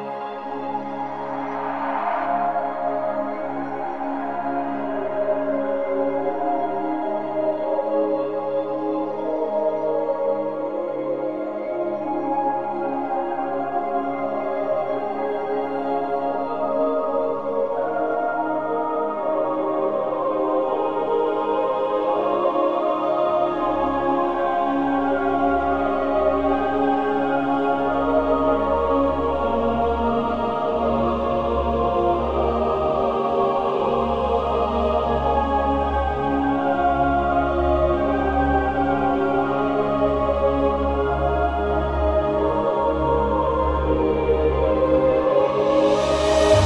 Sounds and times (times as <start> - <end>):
Music: 0.0 - 46.6.